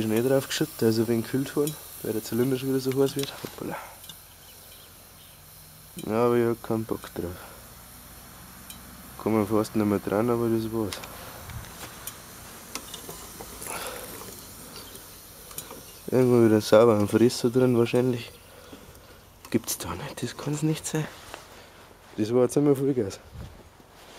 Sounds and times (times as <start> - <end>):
Speech: 0.0 - 3.9, 6.0 - 7.6, 9.2 - 11.0, 16.1 - 18.4, 19.5 - 21.2, 22.2 - 23.3.